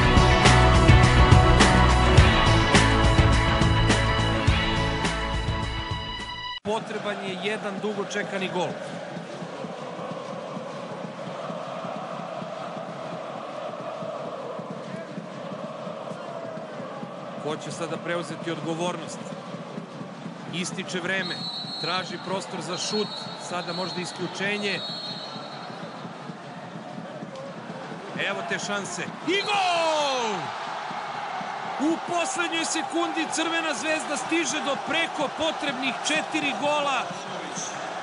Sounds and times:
Speech: 6.7s - 8.8s, 17.4s - 19.3s, 20.5s - 24.8s, 28.2s - 30.5s, 31.8s - 37.8s.

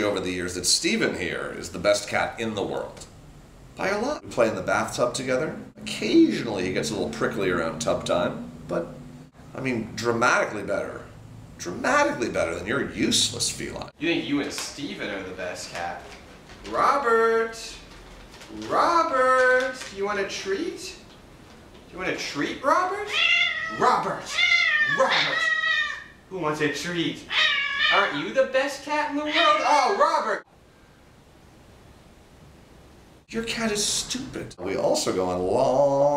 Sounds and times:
Speech: 0.0s - 3.1s, 3.8s - 17.9s, 18.5s - 21.1s, 21.9s - 23.1s, 23.7s - 25.6s, 26.3s - 27.3s, 27.9s - 30.5s, 33.3s - 36.1s
Meow: 23.1s - 26.1s, 27.3s - 28.2s.

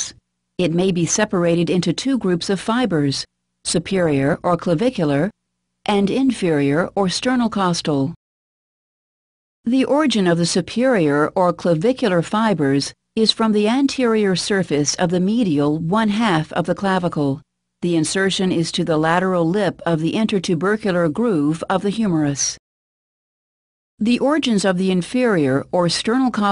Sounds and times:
Speech: 0.0s - 8.2s, 9.7s - 22.6s, 24.0s - 26.5s.

